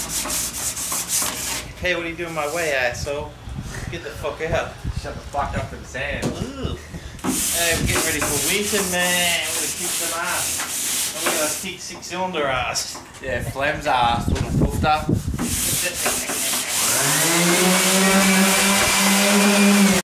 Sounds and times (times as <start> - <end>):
Speech: 1.8 - 3.3, 3.9 - 6.8, 7.5 - 10.5, 11.2 - 16.3.